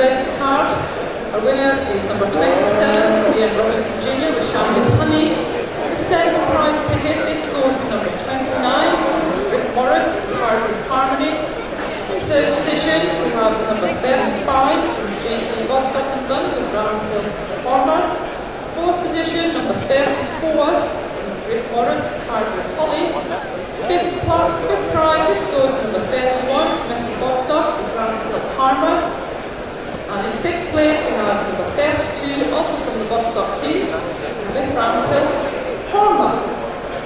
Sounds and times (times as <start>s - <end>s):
Speech: 0.0s - 29.2s, 30.1s - 36.6s
Inside, large room or hall: 0.0s - 37.0s.